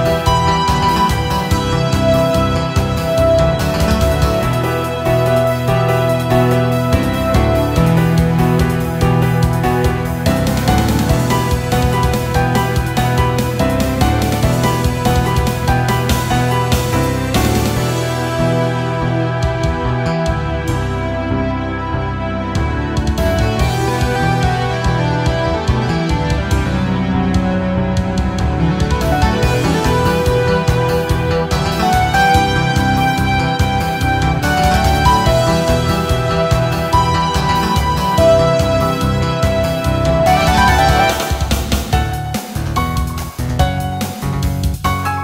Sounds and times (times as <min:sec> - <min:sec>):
Background music: 0:00.0 - 0:45.2.